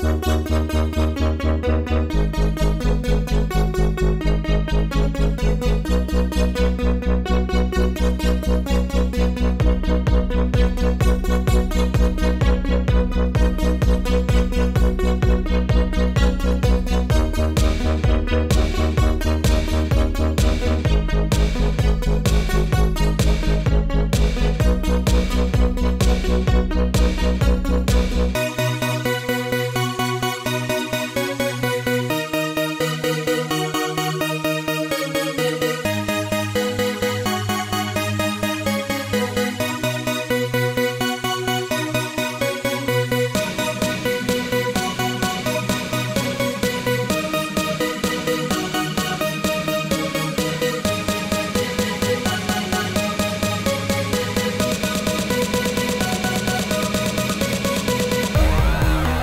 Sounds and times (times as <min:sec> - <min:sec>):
Techno: 0:00.0 - 0:59.2.